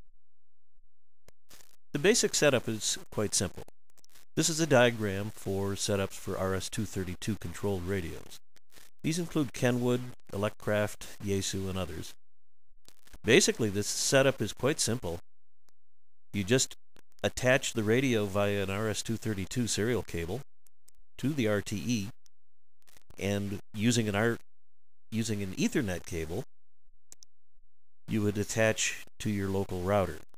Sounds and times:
Speech: 2.0s - 3.7s, 4.4s - 8.4s, 9.0s - 12.1s, 13.3s - 15.2s, 16.4s - 20.4s, 21.2s - 22.2s, 23.2s - 24.4s, 25.2s - 26.5s, 28.1s - 30.3s.

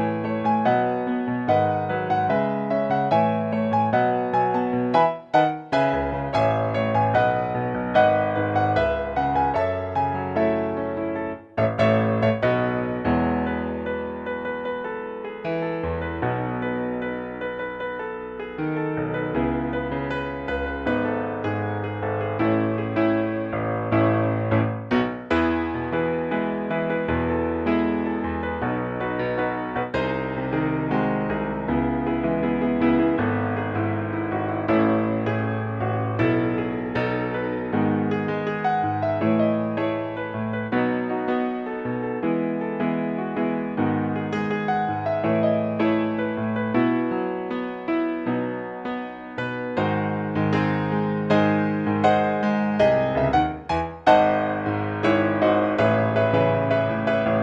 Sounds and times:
Music: 0.0s - 57.4s.

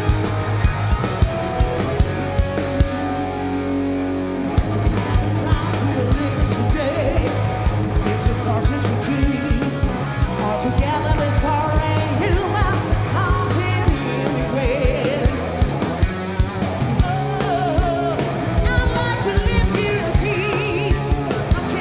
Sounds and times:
Heavy metal: 0.0s - 21.8s
Song: 0.0s - 21.8s.

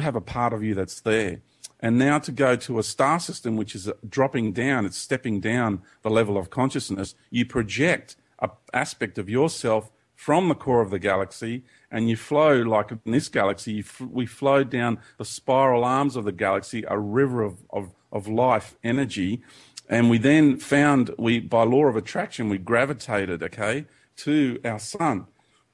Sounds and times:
Speech: 0.0s - 25.3s.

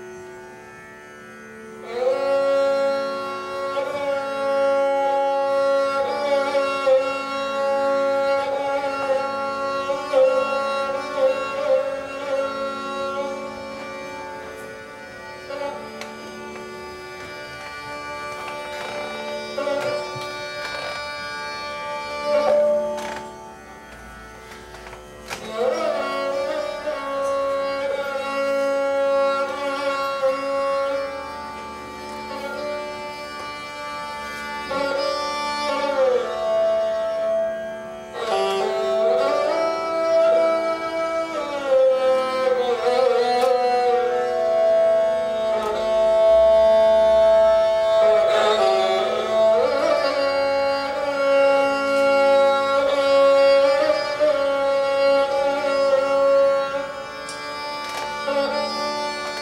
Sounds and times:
Bowed string instrument: 0.0s - 59.4s
Carnatic music: 0.0s - 59.4s
Sitar: 0.0s - 59.4s.

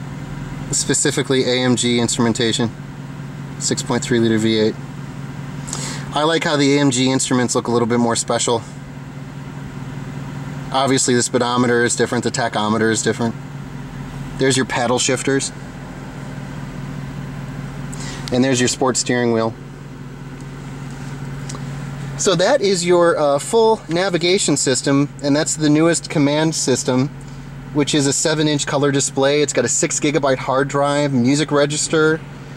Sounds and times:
Car: 0.0s - 32.5s
Speech: 0.7s - 2.8s, 3.6s - 4.8s, 6.1s - 8.8s, 10.7s - 13.4s, 14.4s - 15.6s, 18.3s - 19.6s, 22.2s - 27.2s, 27.8s - 32.3s.

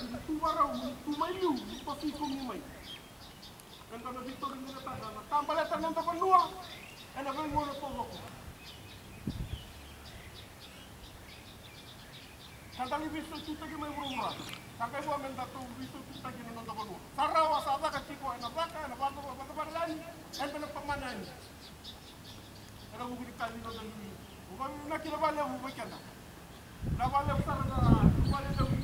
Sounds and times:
Speech: 0.0s - 2.8s, 3.9s - 8.4s, 12.8s - 21.4s, 22.9s - 26.1s, 27.0s - 28.8s.

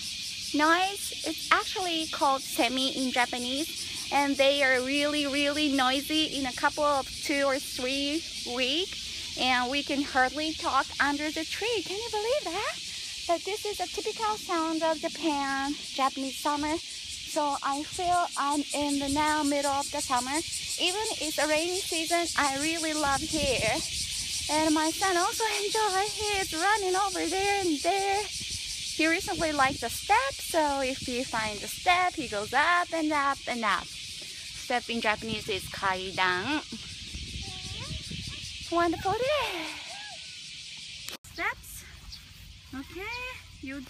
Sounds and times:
Cricket: 0.0s - 43.9s.

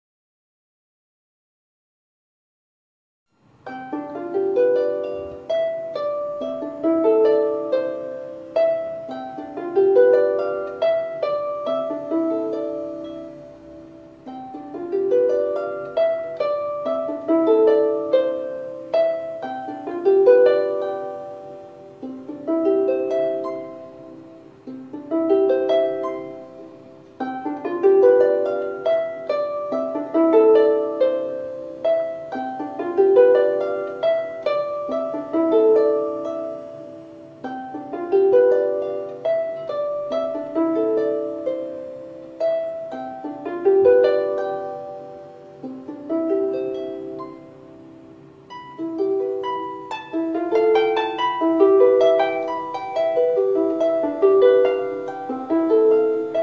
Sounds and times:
Harp: 3.6s - 56.4s.

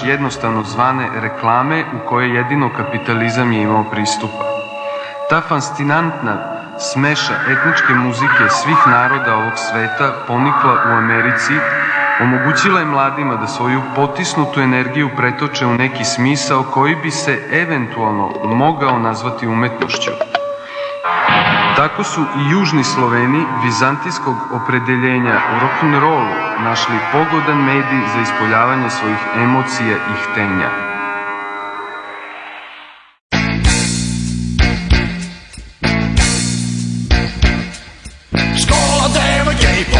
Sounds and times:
Speech: 0.0s - 4.4s, 5.3s - 20.3s, 21.8s - 30.8s
Music: 0.0s - 39.9s.

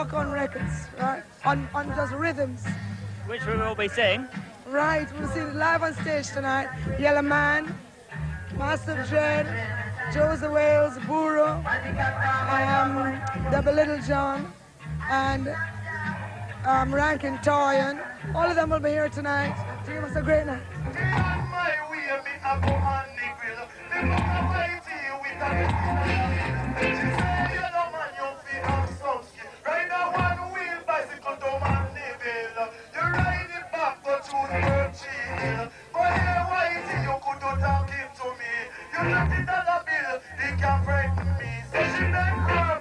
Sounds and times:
Music: 0.0s - 42.8s.

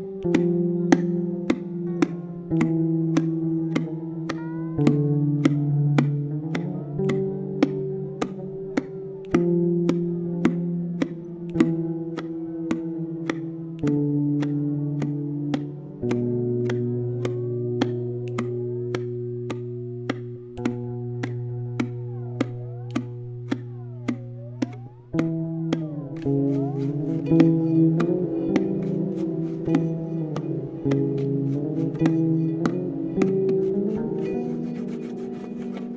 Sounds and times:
Sad music: 0.0s - 35.9s.

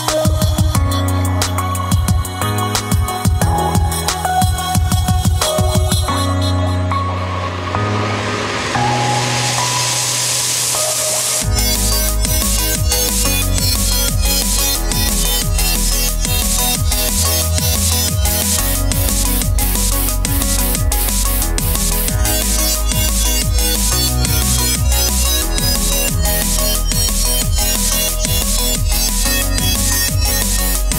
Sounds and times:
Drum and bass: 0.0s - 30.9s.

